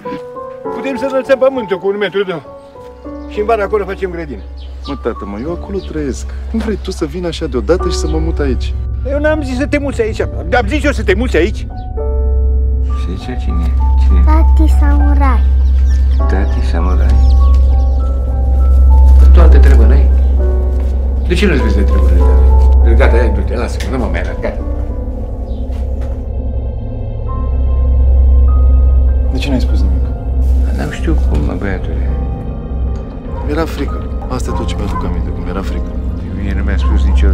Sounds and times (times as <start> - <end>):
Music: 0.0 - 37.3.